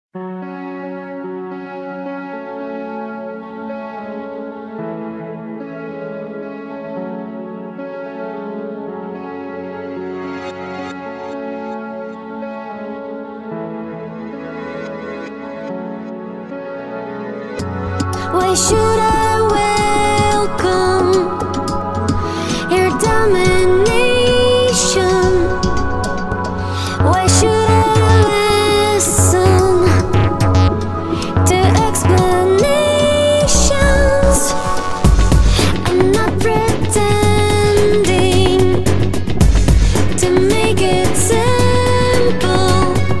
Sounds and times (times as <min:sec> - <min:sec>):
Tender music: 0:00.2 - 0:43.2.